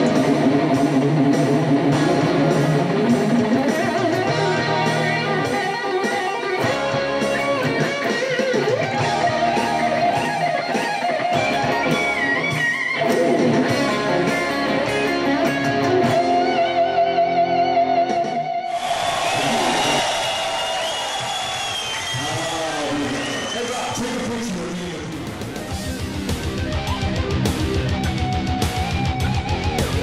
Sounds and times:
Electric guitar: 0.0 - 30.0.

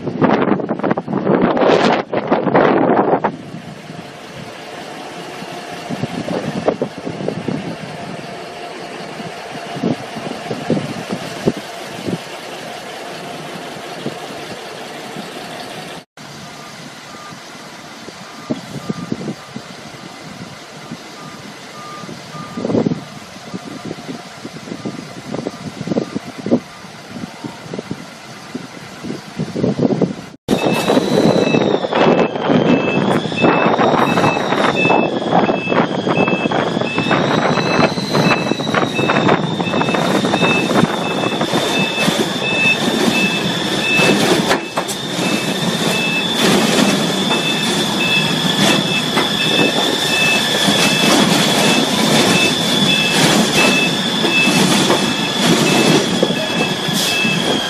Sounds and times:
Vehicle: 0.0 - 57.7.

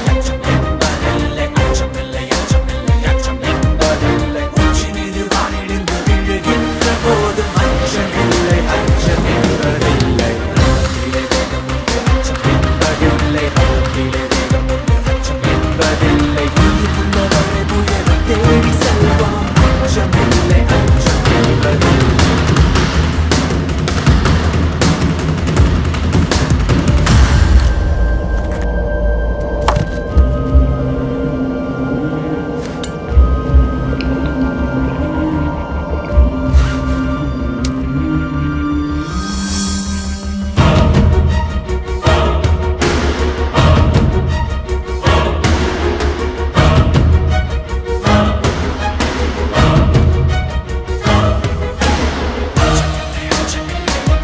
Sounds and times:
Music: 0.0 - 54.2.

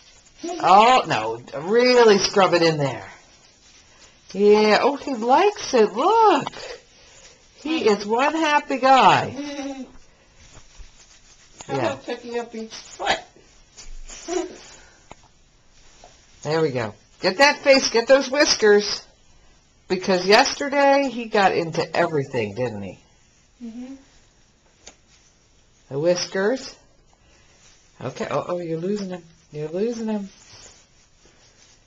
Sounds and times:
Speech: 28.0 - 30.4.

